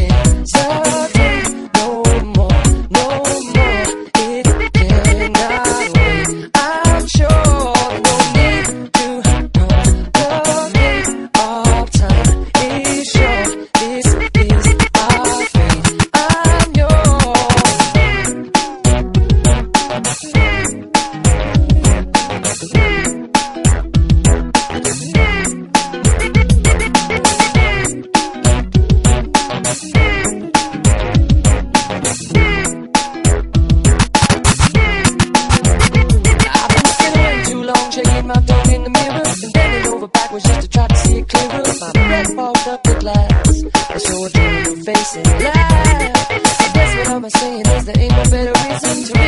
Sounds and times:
Funk: 0.0s - 49.2s.

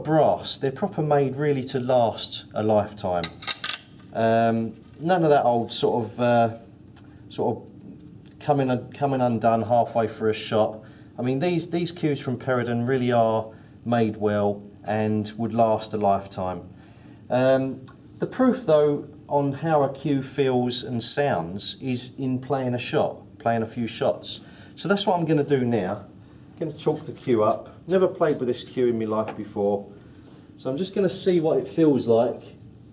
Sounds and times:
Speech: 0.0s - 3.4s, 4.1s - 6.7s, 7.3s - 7.7s, 8.3s - 16.7s, 17.3s - 29.9s, 30.6s - 32.6s
Inside, small room: 0.0s - 32.9s.

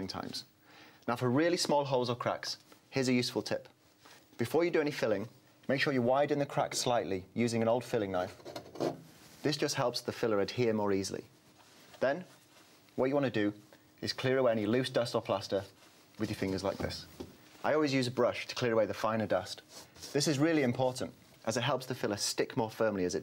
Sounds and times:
Speech: 0.0s - 0.5s, 1.1s - 3.8s, 4.4s - 8.4s, 9.4s - 11.3s, 12.0s - 12.4s, 13.0s - 23.2s.

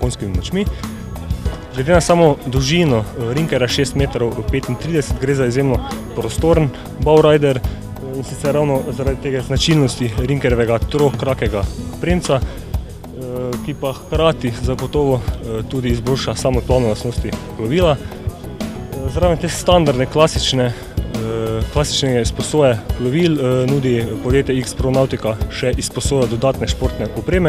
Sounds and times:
Speech: 0.0s - 0.7s, 1.7s - 12.4s, 13.2s - 18.0s, 19.0s - 27.4s
Music: 0.0s - 27.4s.

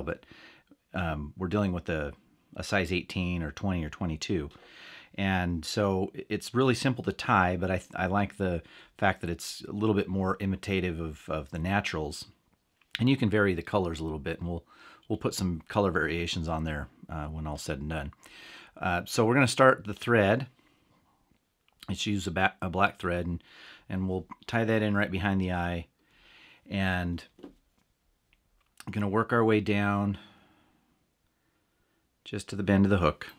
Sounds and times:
Speech: 0.0s - 0.2s, 0.9s - 4.6s, 5.2s - 18.2s, 18.8s - 20.6s, 21.8s - 25.9s, 26.7s - 27.4s, 28.8s - 30.3s, 32.2s - 33.3s.

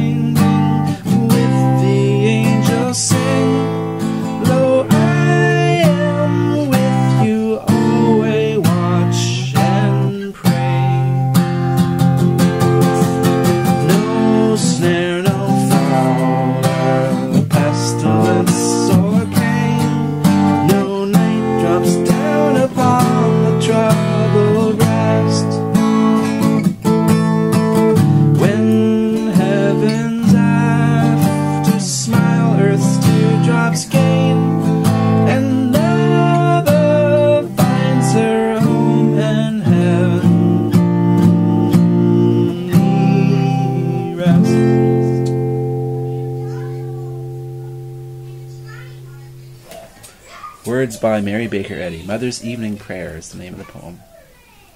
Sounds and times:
Singing: 0.0s - 11.4s, 12.9s - 25.8s, 28.4s - 45.1s
Guitar: 0.0s - 54.7s.

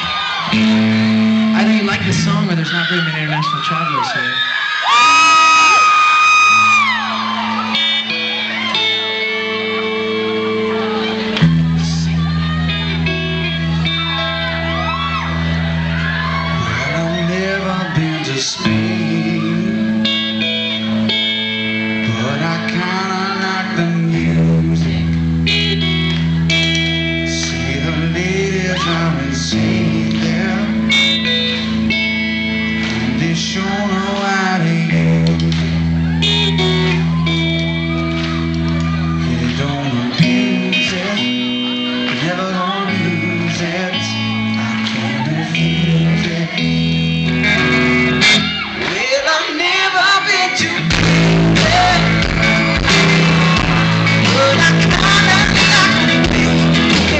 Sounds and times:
Music: 0.0s - 3.2s, 5.6s - 57.1s.

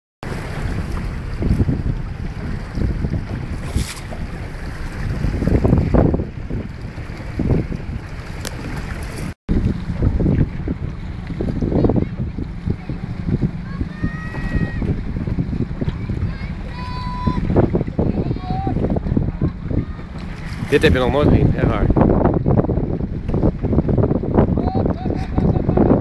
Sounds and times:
Sailboat, sailing ship: 0.2s - 26.0s.

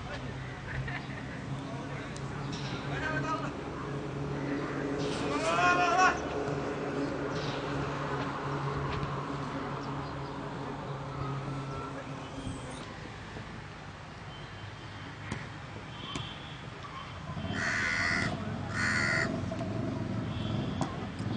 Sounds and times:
Outside, urban or manmade: 0.0s - 21.3s.

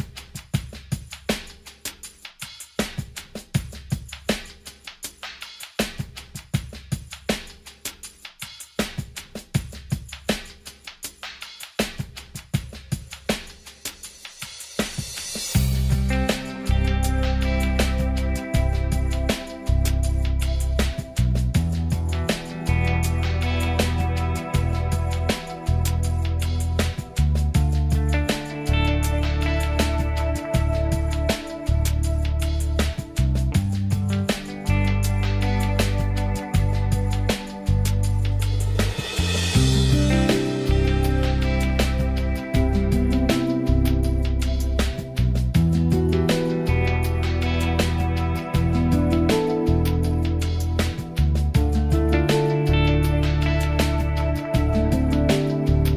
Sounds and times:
Music: 0.0s - 55.9s.

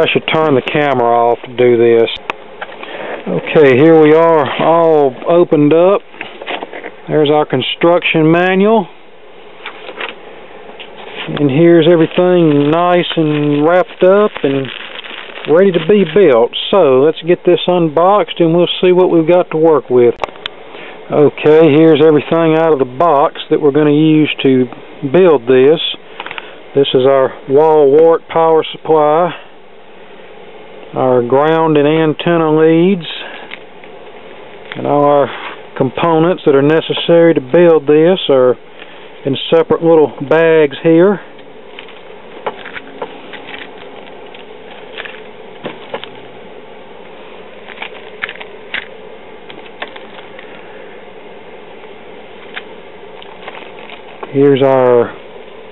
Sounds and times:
Speech: 0.0s - 2.2s, 3.3s - 6.0s, 7.1s - 8.9s, 11.3s - 14.8s, 15.5s - 20.2s, 21.1s - 26.0s, 26.8s - 29.5s, 31.0s - 33.4s, 34.8s - 38.6s, 39.2s - 41.3s, 54.3s - 55.2s.

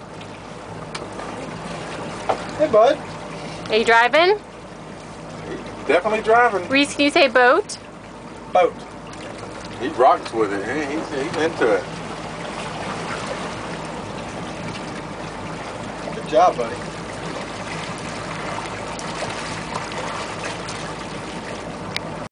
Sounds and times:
Boat, Water vehicle: 0.0s - 22.3s
Speech: 16.2s - 16.8s.

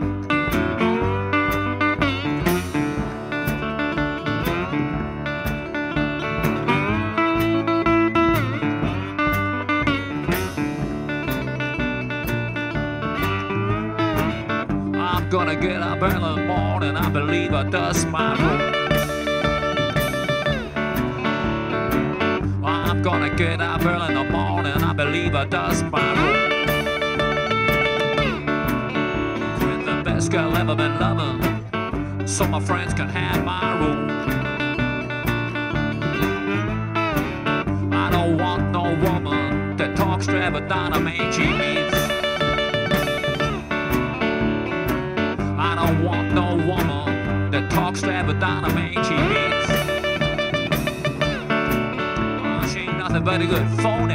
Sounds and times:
Musical instrument: 0.0s - 32.7s, 33.3s - 54.1s
Outside, urban or manmade: 0.0s - 54.1s.

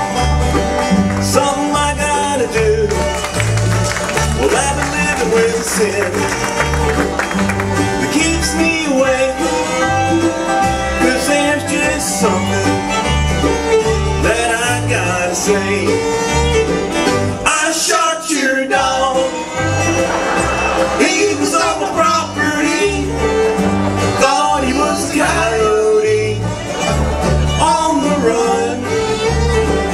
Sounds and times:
Music: 0.0s - 29.9s.

